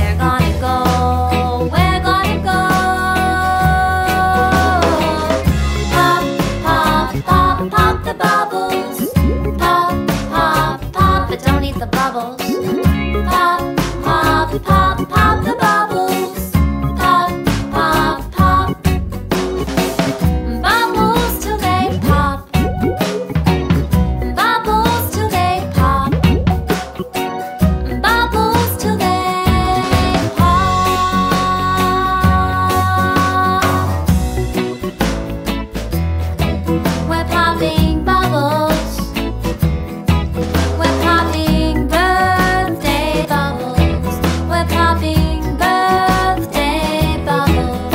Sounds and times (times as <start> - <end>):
Music for children: 0.0 - 47.9.